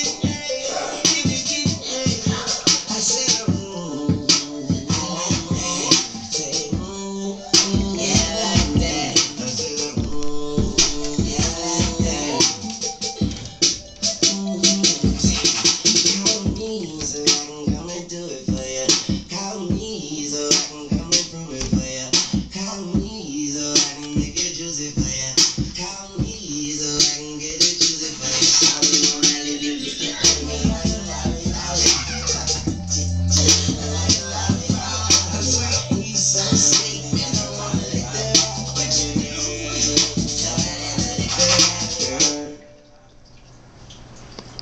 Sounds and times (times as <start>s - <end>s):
Music: 0.0s - 43.1s.